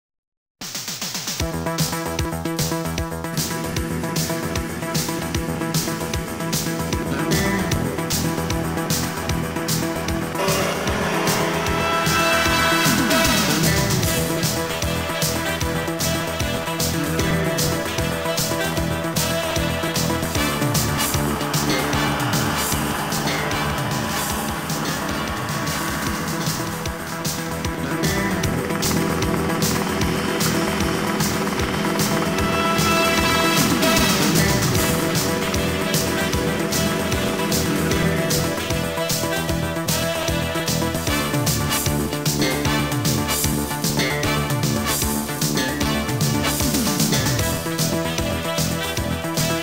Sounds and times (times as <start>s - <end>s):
Music: 0.6s - 49.6s
Helicopter: 1.4s - 49.6s.